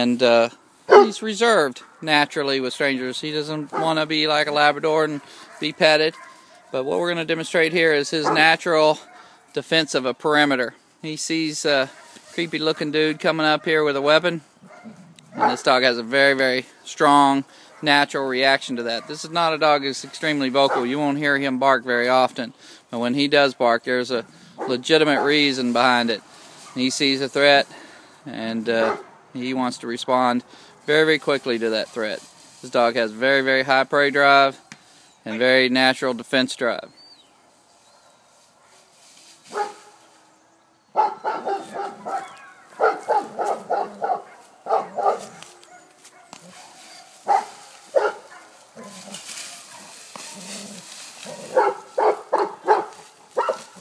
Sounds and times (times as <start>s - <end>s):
Speech: 0.0s - 14.5s, 15.4s - 26.2s, 26.8s - 27.7s, 28.3s - 34.6s, 35.2s - 37.0s
Bow-wow: 0.9s - 1.2s, 5.2s - 6.8s, 8.2s - 9.4s, 14.7s - 15.6s, 20.7s - 21.0s, 28.8s - 29.1s, 39.5s - 39.9s, 41.0s - 50.5s, 51.2s - 53.8s.